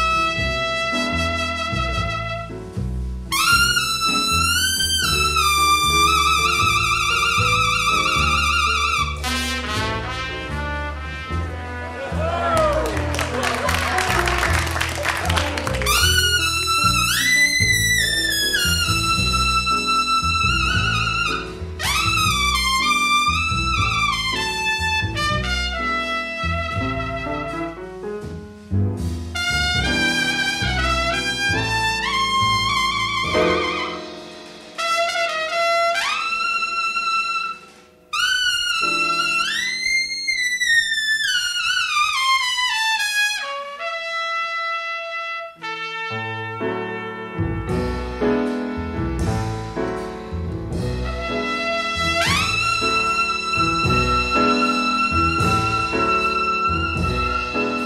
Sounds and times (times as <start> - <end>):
Trumpet: 0.0 - 57.8.